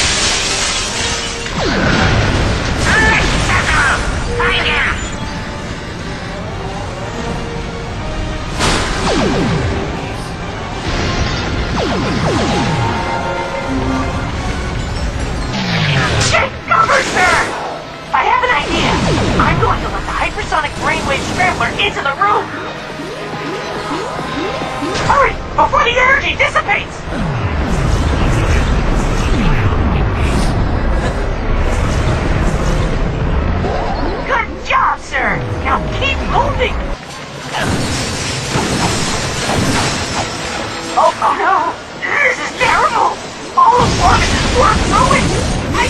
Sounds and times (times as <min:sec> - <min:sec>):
Music: 0:00.0 - 0:45.9.